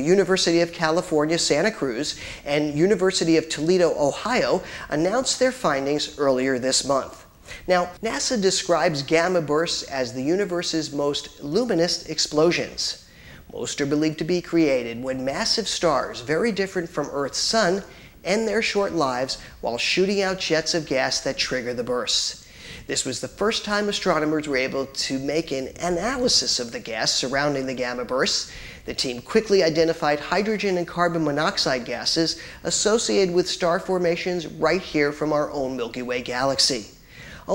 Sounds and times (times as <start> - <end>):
Speech: 0.0 - 37.5.